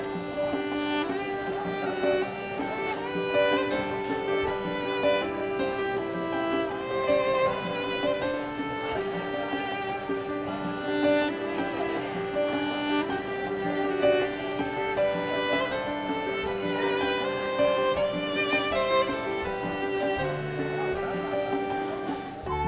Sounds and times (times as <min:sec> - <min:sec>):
Bowed string instrument: 0:00.0 - 0:22.6.